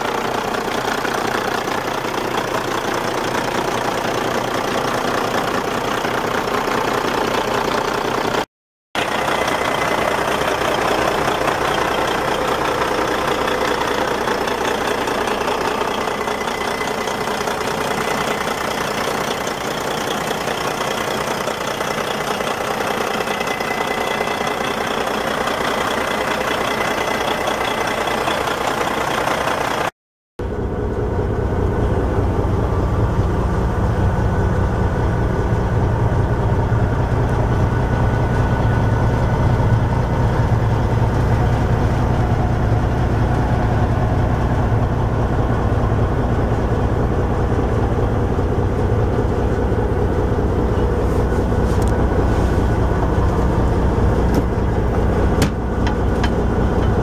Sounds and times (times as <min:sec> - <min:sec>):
Truck: 0:00.0 - 0:57.0.